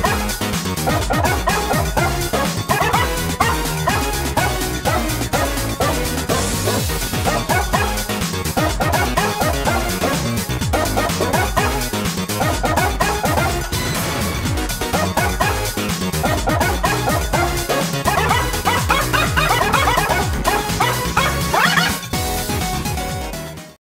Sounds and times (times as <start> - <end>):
Music: 0.0 - 23.8
Dog: 0.9 - 8.0, 8.6 - 11.8, 14.9 - 15.6, 16.2 - 22.0.